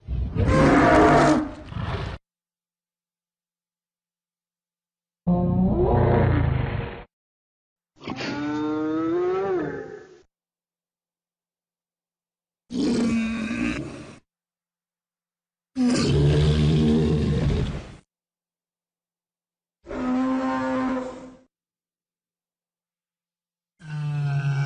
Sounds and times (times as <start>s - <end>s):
Roar: 0.0s - 2.2s, 5.3s - 7.1s, 8.0s - 10.3s, 12.7s - 14.3s, 15.8s - 18.0s, 19.9s - 21.5s, 23.8s - 24.6s
Sound effect: 5.3s - 7.1s, 8.0s - 10.2s.